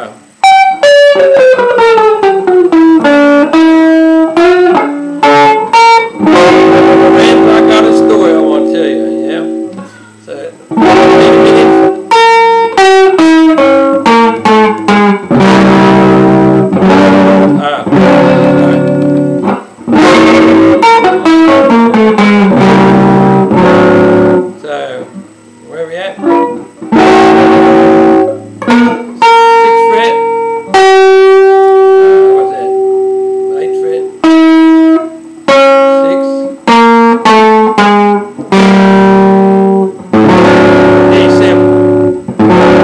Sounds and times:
Guitar: 0.0s - 42.8s
Inside, small room: 0.0s - 42.8s
Speech: 7.1s - 9.6s, 10.2s - 10.6s, 17.5s - 18.0s, 24.6s - 26.3s, 29.8s - 30.3s, 32.3s - 32.8s, 33.5s - 34.2s, 35.9s - 36.5s, 41.0s - 41.8s.

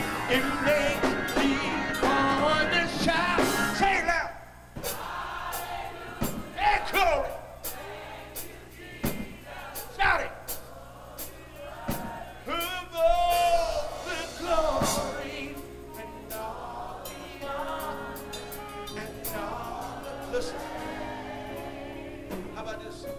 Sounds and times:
Music: 0.0s - 3.9s, 4.8s - 23.1s
Male singing: 0.3s - 3.6s, 12.5s - 16.6s, 18.9s - 20.6s.

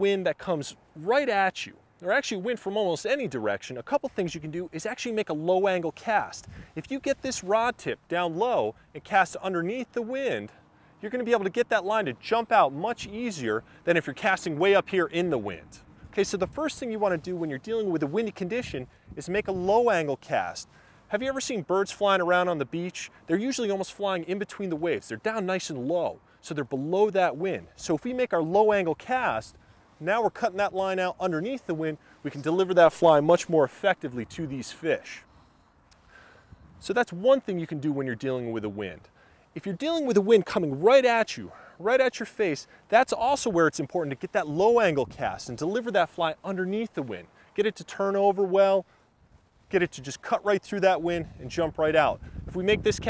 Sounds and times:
Speech: 0.0s - 35.2s, 36.8s - 48.8s, 49.7s - 53.0s.

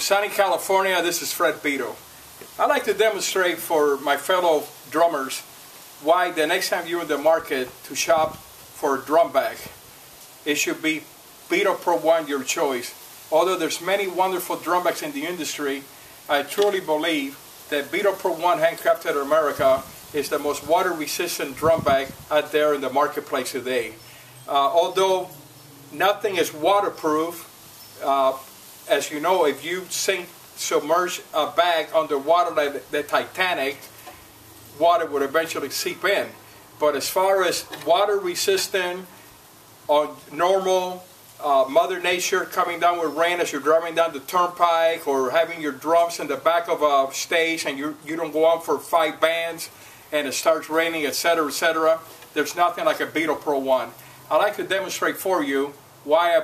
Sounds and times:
Speech: 0.0s - 2.0s, 2.6s - 9.8s, 10.4s - 33.9s, 34.8s - 39.1s, 39.9s - 56.4s.

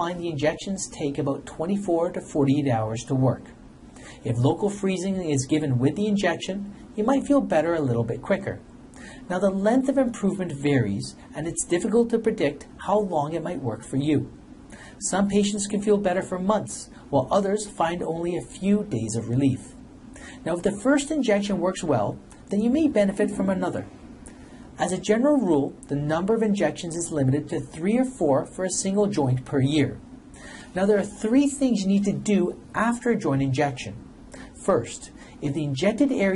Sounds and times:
Speech: 0.0s - 3.6s, 4.2s - 8.7s, 9.3s - 14.4s, 15.0s - 19.8s, 20.4s - 24.0s, 24.8s - 30.1s, 30.7s - 36.3s.

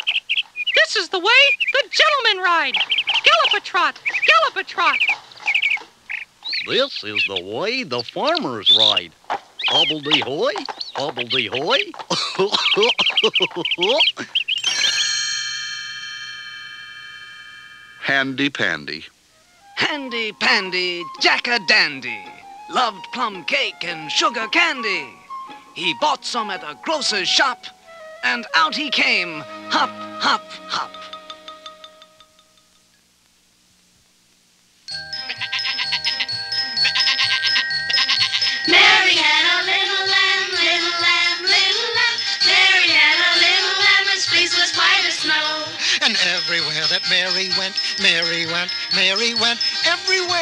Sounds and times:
Speech: 0.8s - 5.0s, 6.6s - 9.1s, 9.7s - 12.0s, 18.0s - 19.1s, 25.8s - 31.0s.

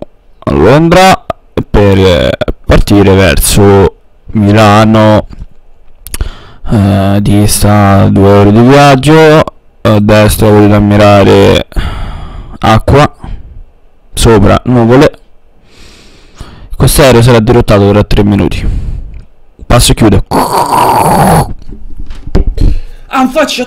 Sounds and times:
Speech: 0.4s - 5.3s, 6.7s - 11.8s, 12.6s - 13.3s, 14.2s - 15.2s, 16.8s - 18.7s, 19.6s - 20.5s, 23.1s - 23.6s.

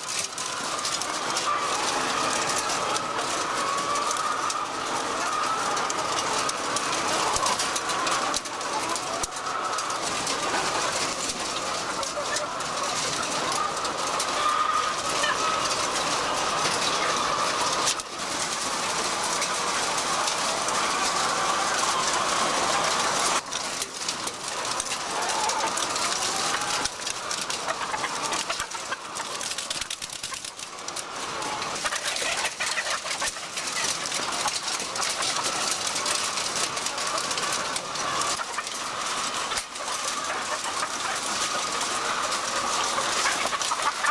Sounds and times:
Chicken, rooster: 0.0s - 44.1s.

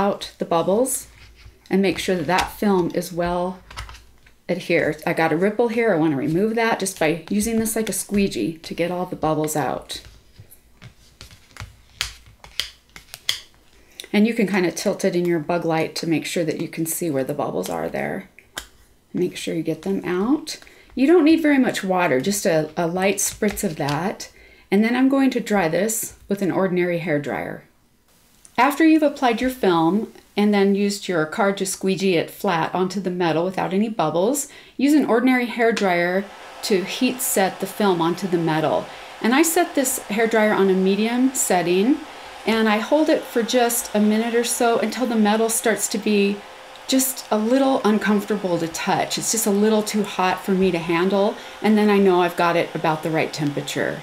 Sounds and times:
Speech: 0.0s - 1.1s, 1.7s - 3.6s, 4.5s - 10.1s, 14.1s - 18.3s, 19.2s - 27.7s, 28.6s - 54.0s
Inside, small room: 0.0s - 54.0s.

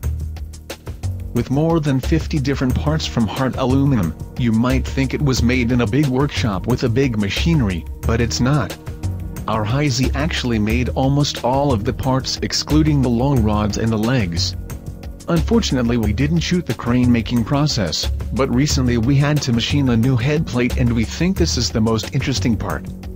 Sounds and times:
Music: 0.0s - 23.1s
Speech: 1.4s - 8.8s, 9.5s - 14.6s, 15.3s - 22.9s.

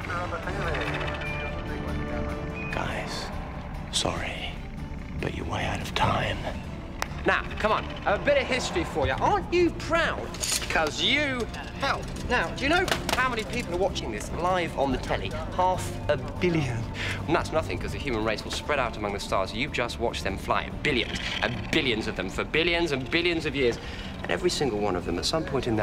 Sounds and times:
Music: 0.0s - 25.8s.

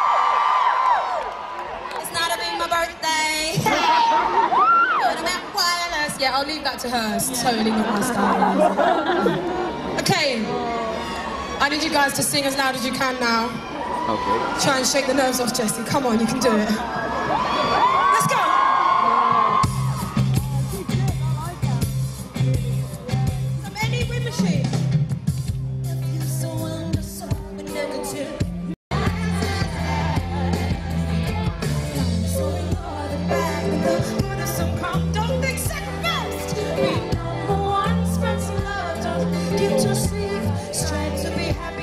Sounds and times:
Female speech, woman speaking: 2.0s - 3.8s, 5.0s - 8.4s, 10.0s - 10.8s, 11.6s - 13.6s, 14.6s - 16.8s, 23.6s - 24.7s
Music: 19.5s - 41.8s.

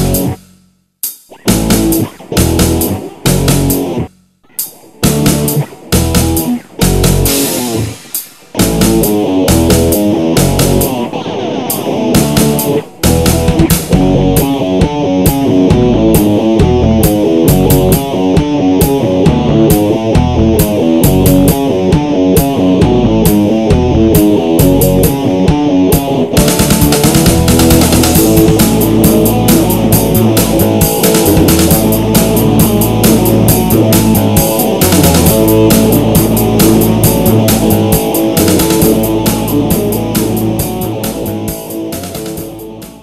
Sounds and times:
Strum: 1.4s - 43.0s.

